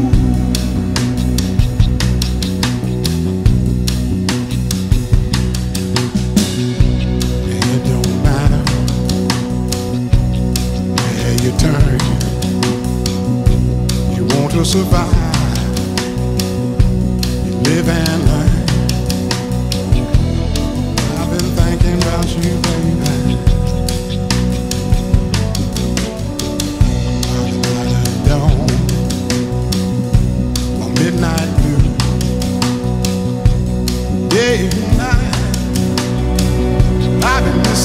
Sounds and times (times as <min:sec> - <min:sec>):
Music: 0:00.0 - 0:37.8.